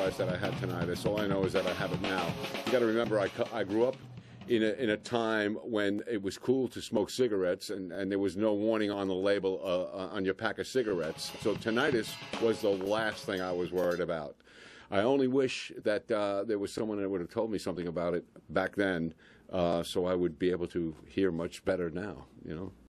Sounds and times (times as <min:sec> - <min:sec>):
Speech: 0:00.0 - 0:22.8.